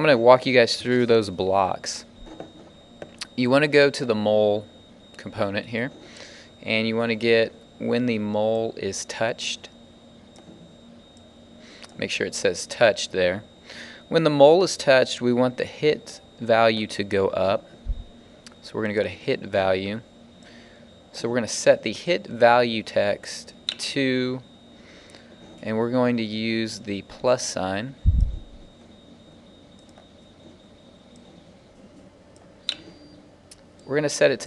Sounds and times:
Speech: 0.0s - 2.1s, 3.2s - 6.0s, 6.6s - 9.7s, 12.0s - 13.5s, 14.1s - 17.7s, 18.6s - 20.1s, 21.1s - 24.5s, 25.6s - 28.0s, 33.9s - 34.4s.

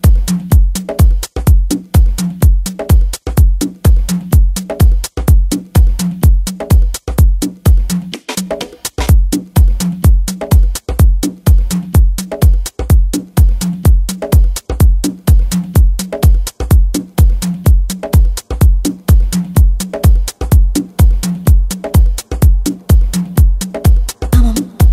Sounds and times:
Music: 0.0s - 24.9s.

